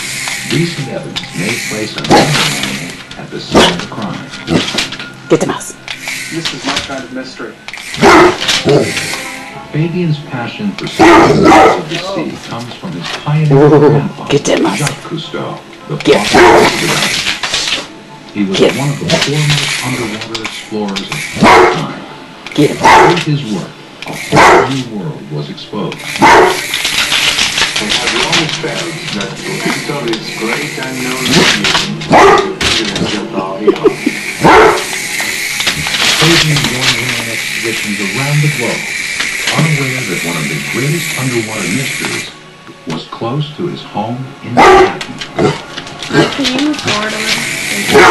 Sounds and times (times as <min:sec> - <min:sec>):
Speech: 0:00.5 - 0:04.3, 0:06.4 - 0:07.6, 0:09.7 - 0:17.7, 0:18.4 - 0:23.8, 0:24.5 - 0:26.0, 0:27.8 - 0:34.1, 0:36.2 - 0:38.9, 0:39.5 - 0:45.0, 0:46.2 - 0:48.1.